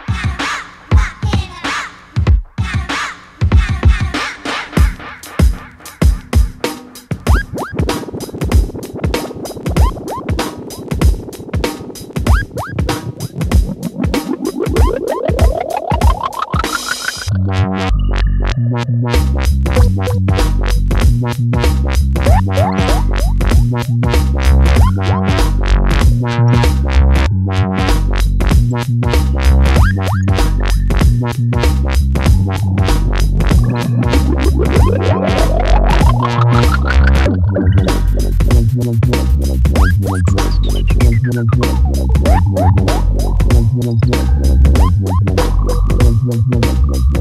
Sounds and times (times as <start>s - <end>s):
Music: 0.0s - 47.2s.